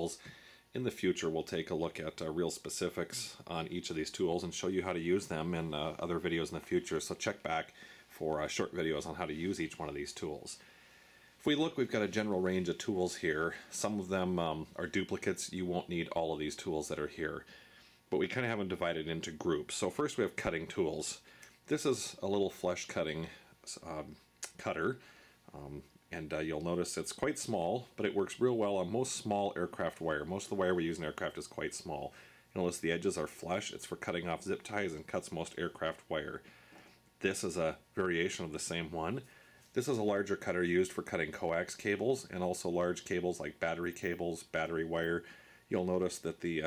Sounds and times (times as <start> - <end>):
Speech: 0.0 - 10.6, 11.4 - 17.5, 18.1 - 36.5, 37.2 - 46.6.